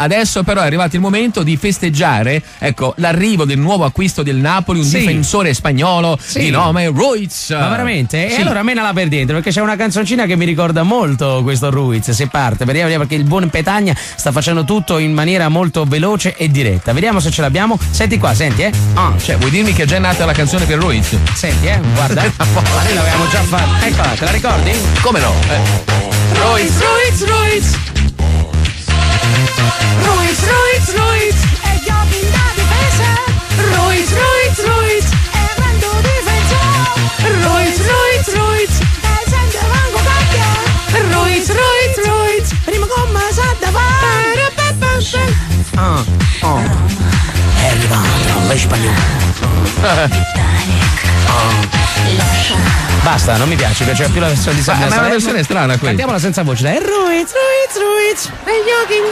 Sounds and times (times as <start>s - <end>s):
Music: 0.0s - 59.1s.